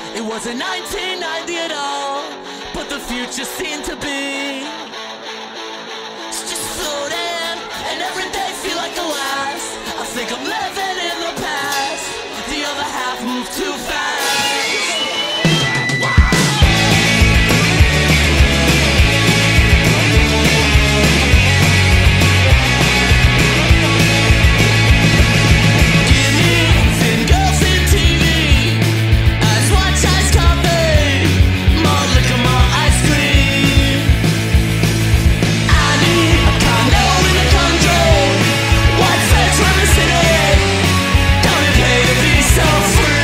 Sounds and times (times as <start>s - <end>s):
Music: 0.0s - 43.2s.